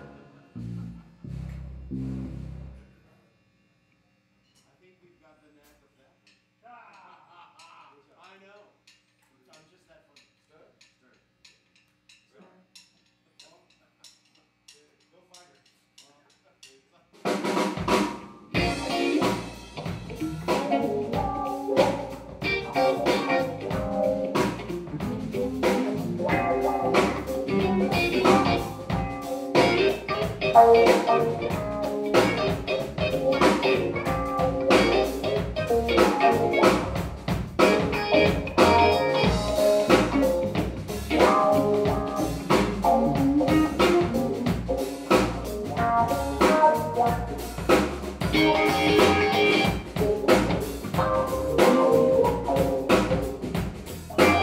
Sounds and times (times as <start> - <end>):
Music: 0.0 - 2.9, 12.2 - 54.4.